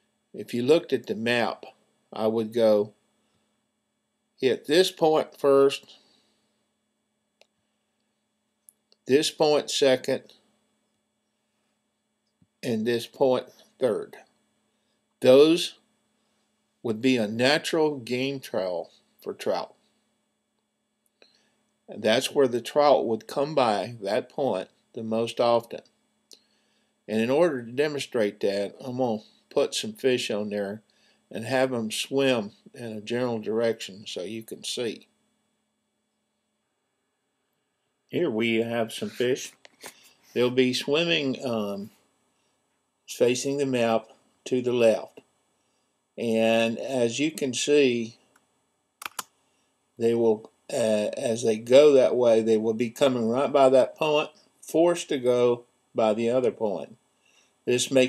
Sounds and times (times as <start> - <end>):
Speech: 0.4 - 2.9, 4.4 - 5.9, 9.1 - 10.3, 12.6 - 14.2, 15.2 - 15.8, 16.9 - 19.7, 21.9 - 25.8, 27.1 - 35.0, 38.2 - 39.6, 40.4 - 41.9, 43.1 - 45.2, 46.2 - 48.2, 50.0 - 57.0, 57.7 - 58.0.